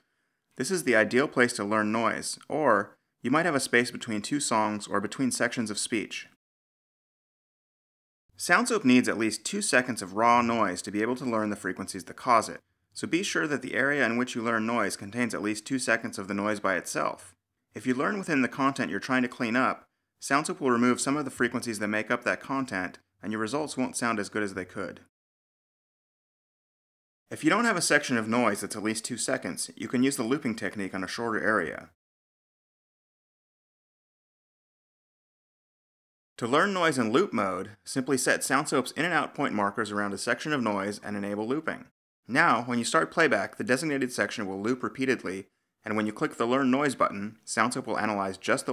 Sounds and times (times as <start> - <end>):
Speech: 0.6 - 6.4, 8.4 - 25.1, 27.3 - 32.0, 36.4 - 48.7.